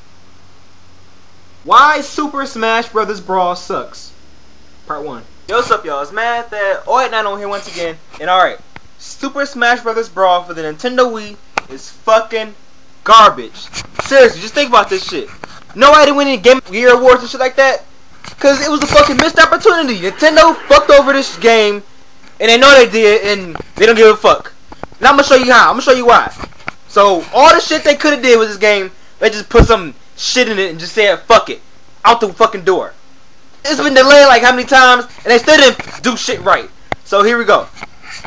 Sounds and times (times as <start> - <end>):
Speech: 1.6 - 4.2, 4.9 - 33.0, 33.6 - 37.7.